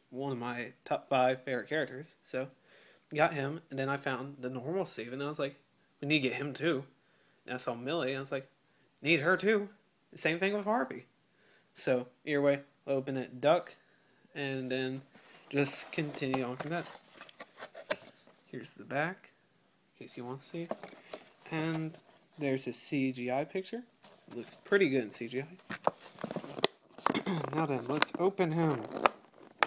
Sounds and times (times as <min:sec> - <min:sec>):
Speech: 0:00.0 - 0:06.9, 0:07.5 - 0:11.1, 0:11.8 - 0:13.8, 0:14.4 - 0:17.0, 0:18.5 - 0:19.4, 0:20.0 - 0:20.8, 0:21.5 - 0:25.6, 0:27.4 - 0:29.0.